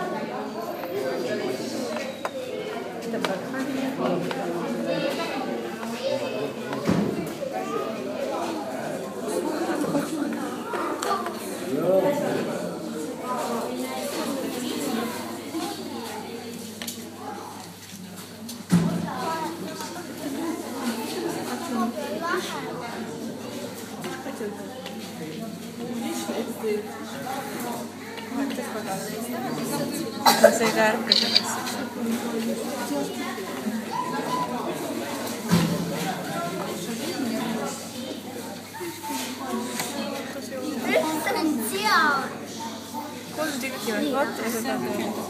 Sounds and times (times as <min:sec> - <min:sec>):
Speech: 0:00.0 - 0:45.2.